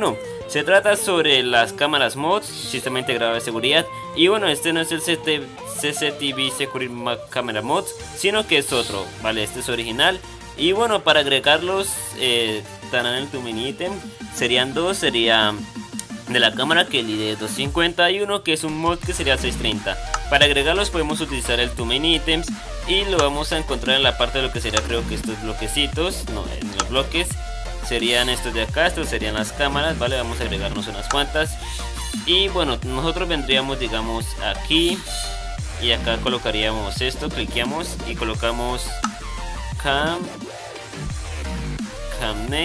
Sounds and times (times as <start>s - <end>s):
Speech: 0.0s - 15.7s, 16.3s - 31.6s, 32.2s - 39.1s, 39.8s - 40.3s, 42.1s - 42.6s
Music: 0.0s - 42.6s.